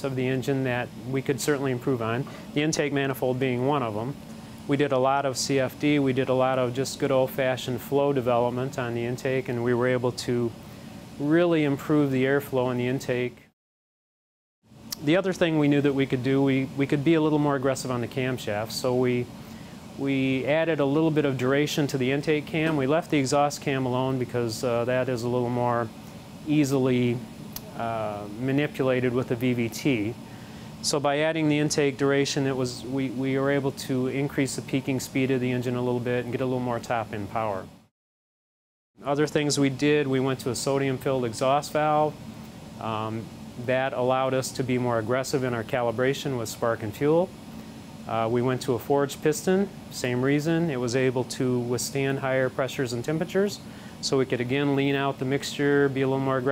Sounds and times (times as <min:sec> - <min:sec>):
Speech: 0:00.0 - 0:10.6, 0:11.2 - 0:13.5, 0:14.9 - 0:19.3, 0:20.0 - 0:30.2, 0:30.8 - 0:37.8, 0:39.0 - 0:42.2, 0:42.8 - 0:47.4, 0:48.1 - 0:56.5.